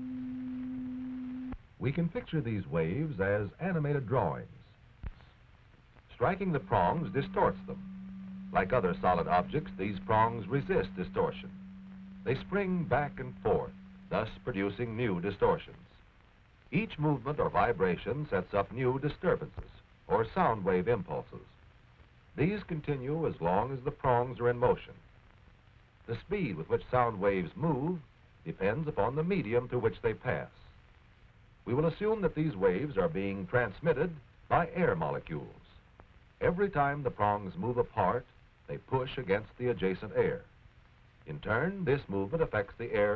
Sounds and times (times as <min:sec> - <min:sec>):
Speech: 0:01.8 - 0:04.8, 0:06.1 - 0:07.8, 0:08.6 - 0:11.5, 0:12.2 - 0:16.0, 0:16.8 - 0:21.6, 0:22.4 - 0:25.0, 0:26.1 - 0:30.8, 0:31.7 - 0:35.8, 0:36.4 - 0:40.5, 0:41.3 - 0:43.1.